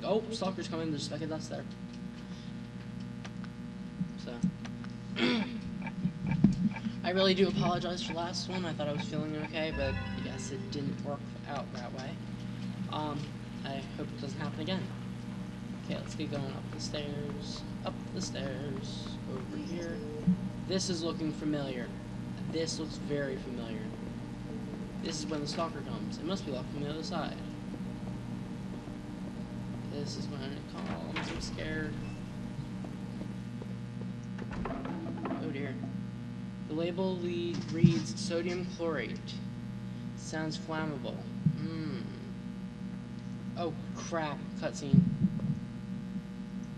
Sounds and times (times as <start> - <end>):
Speech: 0.0 - 1.8, 4.2 - 4.5, 7.0 - 12.2, 12.9 - 14.9, 15.8 - 24.0, 25.0 - 27.5, 29.9 - 32.1, 35.3 - 35.8, 36.7 - 39.5, 40.2 - 42.3, 43.6 - 45.0.